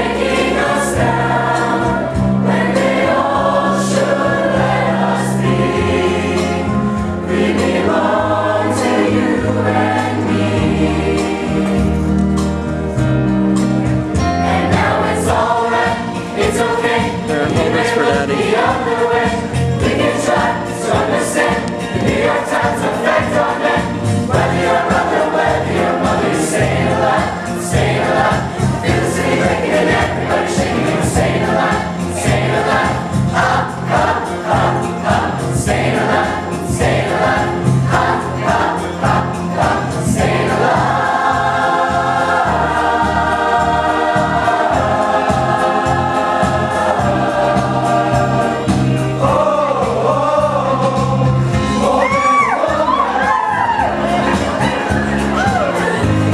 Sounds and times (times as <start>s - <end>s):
Choir: 0.0s - 56.3s
Gospel music: 0.0s - 56.3s.